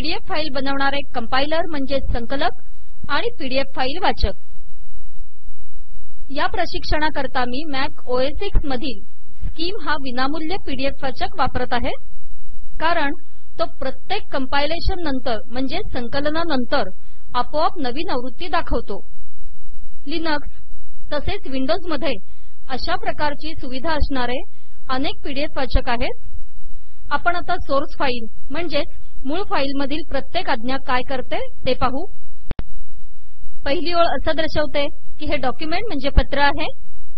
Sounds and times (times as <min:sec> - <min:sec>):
Speech: 0:00.0 - 0:04.4, 0:06.3 - 0:09.0, 0:09.6 - 0:12.0, 0:12.8 - 0:19.0, 0:20.1 - 0:20.5, 0:21.1 - 0:26.2, 0:27.1 - 0:32.1, 0:33.7 - 0:36.8.